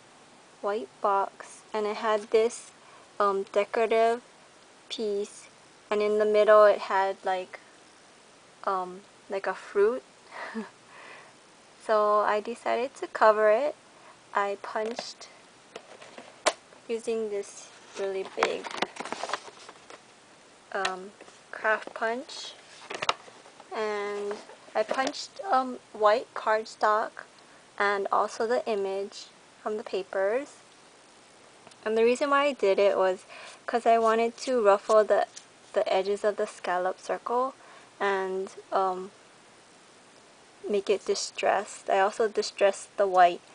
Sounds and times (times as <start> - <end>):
Speech: 0.6 - 4.3, 4.9 - 7.6, 8.6 - 10.0, 11.8 - 13.8, 14.4 - 15.4, 16.9 - 18.8, 20.7 - 22.6, 23.7 - 30.6, 31.8 - 39.2, 40.7 - 43.4.